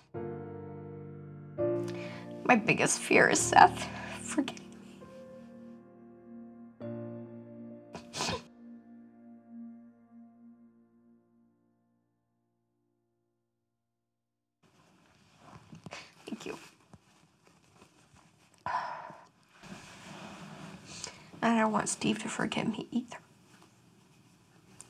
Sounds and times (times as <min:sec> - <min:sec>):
Music: 0:00.0 - 0:13.2
Speech: 0:02.5 - 0:04.6, 0:16.3 - 0:16.7, 0:21.4 - 0:23.2.